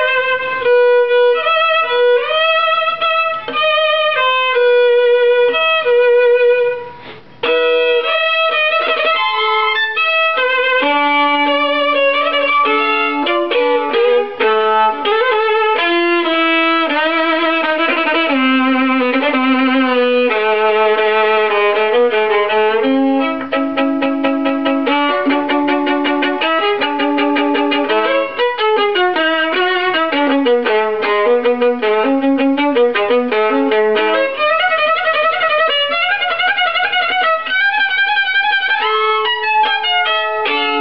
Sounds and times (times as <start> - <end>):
Violin, fiddle: 0.0 - 40.8.